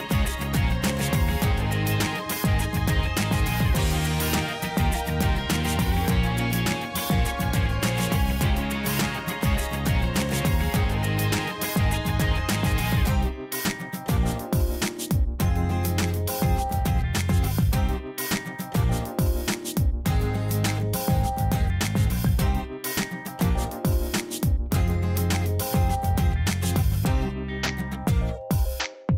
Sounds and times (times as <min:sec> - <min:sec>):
Music: 0:00.0 - 0:29.1.